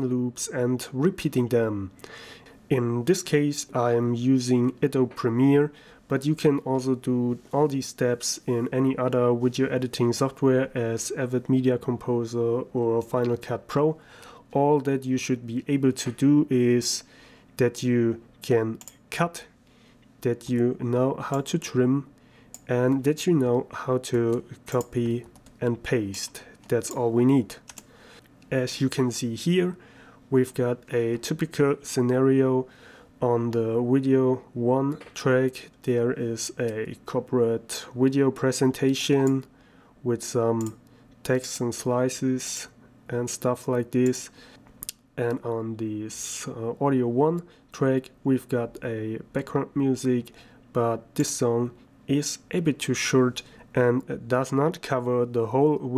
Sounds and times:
Speech: 0.0 - 2.0, 2.7 - 19.6, 20.2 - 27.7, 28.5 - 44.4, 45.2 - 55.9.

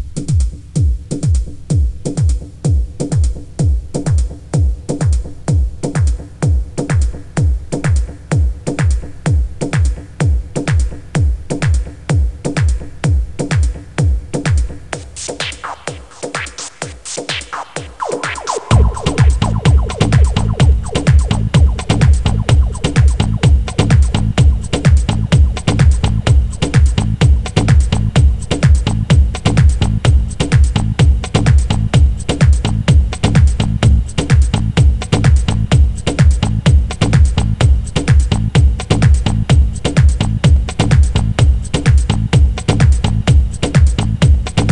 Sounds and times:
House music: 15.6 - 27.0.

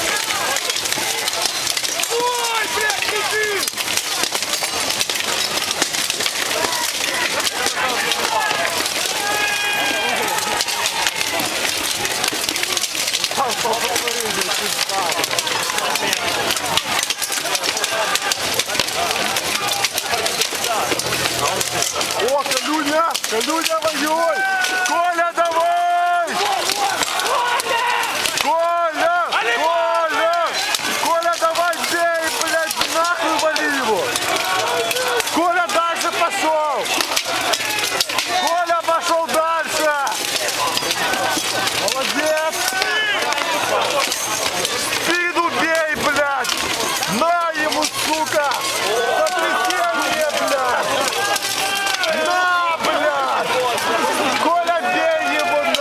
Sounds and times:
Speech: 0.0 - 4.4, 6.4 - 55.8.

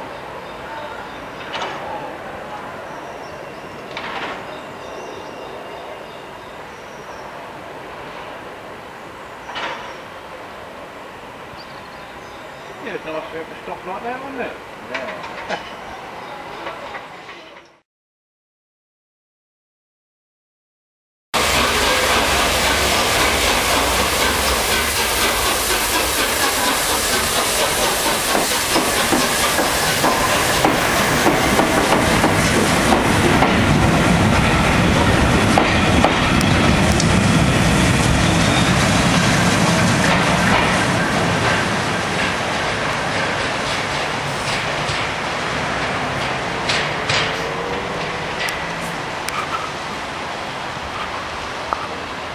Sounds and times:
Railroad car, train wagon: 0.0 - 17.8, 21.4 - 52.3
Train: 0.0 - 17.8, 21.4 - 52.3
Clickety-clack: 21.8 - 33.6, 35.5 - 37.1, 40.0 - 40.8, 41.4 - 45.2, 46.2 - 48.7.

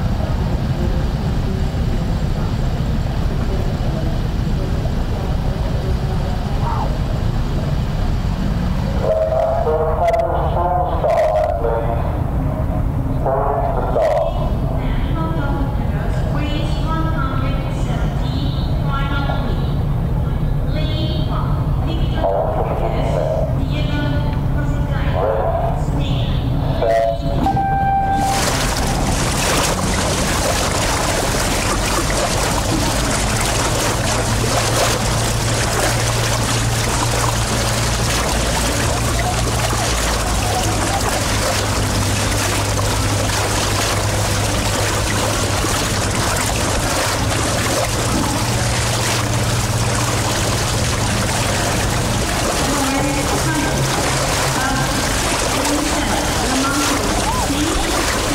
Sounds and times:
Rowboat, canoe, kayak: 0.0 - 58.3.

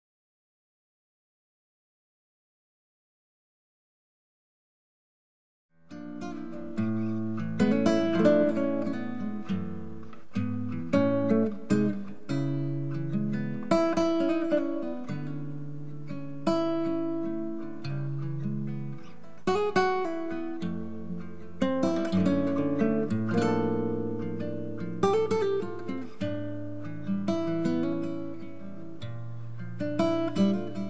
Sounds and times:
Acoustic guitar: 5.8 - 30.8.

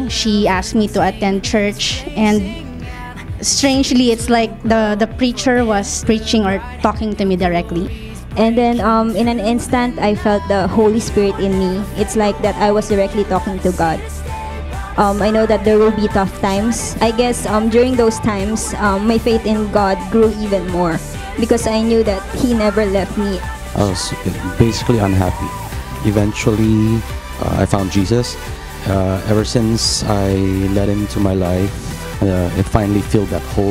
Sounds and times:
Speech: 0.0 - 2.6, 3.4 - 14.0, 15.0 - 33.7
Music: 0.0 - 33.7.

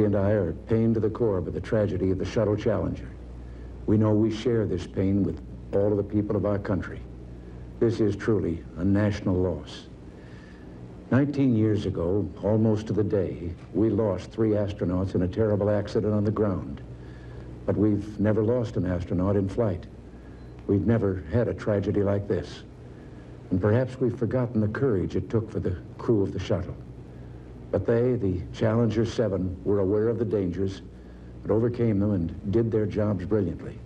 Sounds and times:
Speech: 0.0 - 3.2, 3.9 - 7.1, 7.8 - 10.0, 11.1 - 16.9, 17.7 - 20.0, 20.7 - 22.7, 23.5 - 26.9, 27.7 - 33.8.

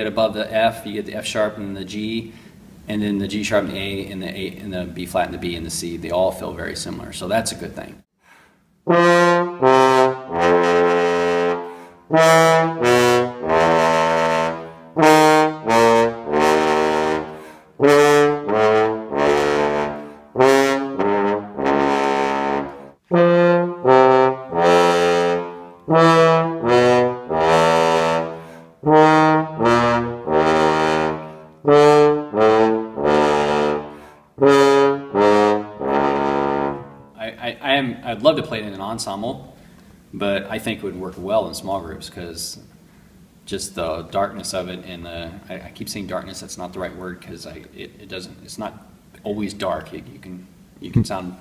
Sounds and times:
French horn: 8.8 - 37.2.

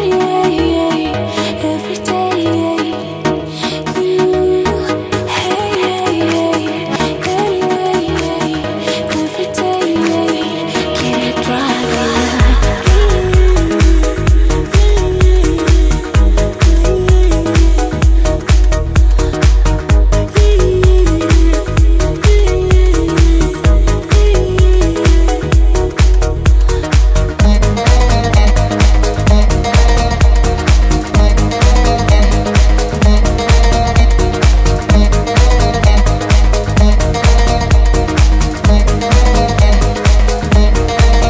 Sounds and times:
Dance music: 0.0 - 41.3.

